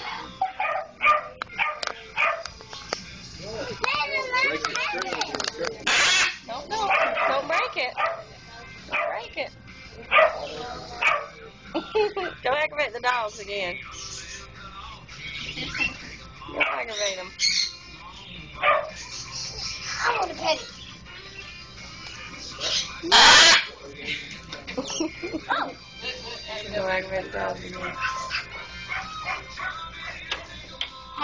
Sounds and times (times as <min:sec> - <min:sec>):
Canidae, dogs, wolves: 0:00.0 - 0:02.6, 0:06.7 - 0:09.4, 0:10.0 - 0:11.5, 0:15.7 - 0:17.6, 0:18.6 - 0:20.3, 0:27.7 - 0:30.3
Yip: 0:00.4 - 0:02.5, 0:05.9 - 0:08.2, 0:10.1 - 0:11.3, 0:18.6 - 0:19.0, 0:23.1 - 0:23.7, 0:28.0 - 0:29.8.